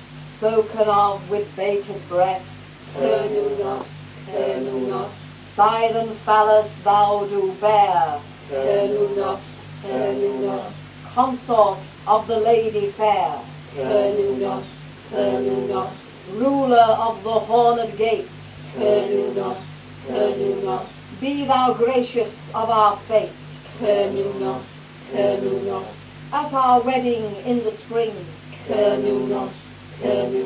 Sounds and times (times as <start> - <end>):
Mantra: 0.4 - 30.4.